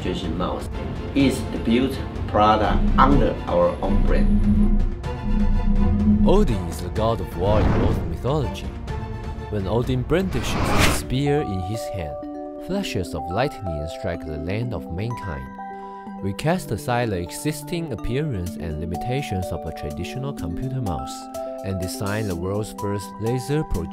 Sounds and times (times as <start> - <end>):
Speech: 0.0 - 4.3, 6.3 - 8.8, 9.5 - 15.5, 16.2 - 23.9
Music: 0.0 - 23.9.